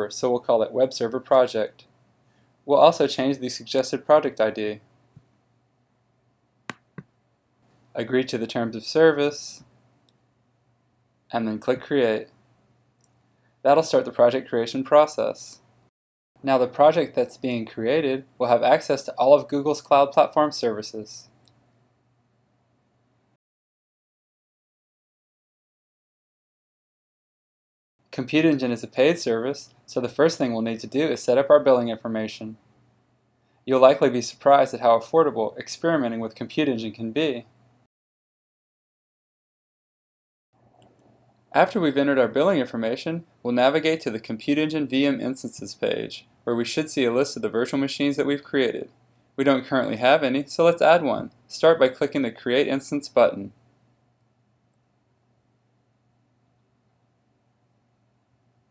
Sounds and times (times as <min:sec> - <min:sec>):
Speech: 0:00.0 - 0:01.9, 0:02.7 - 0:04.9, 0:08.0 - 0:09.7, 0:11.3 - 0:12.4, 0:13.6 - 0:15.7, 0:16.4 - 0:21.4, 0:28.1 - 0:32.6, 0:33.7 - 0:37.5, 0:41.5 - 0:53.6.